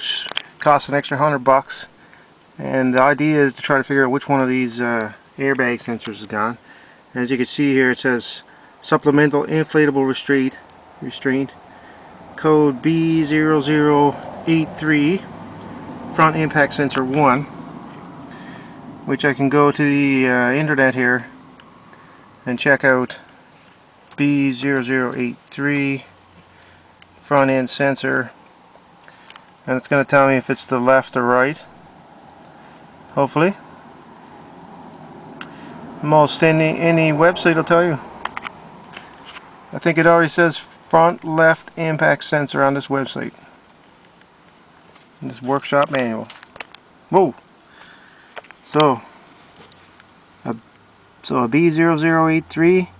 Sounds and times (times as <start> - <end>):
Speech: 0.0 - 1.9, 2.6 - 11.6, 12.4 - 15.3, 16.1 - 17.5, 19.1 - 21.4, 22.4 - 23.3, 24.1 - 26.1, 27.2 - 28.4, 29.6 - 31.7, 33.2 - 33.6, 36.0 - 38.1, 39.7 - 43.4, 45.2 - 46.4, 47.1 - 47.4, 48.6 - 49.1, 50.4 - 50.6, 51.2 - 53.0.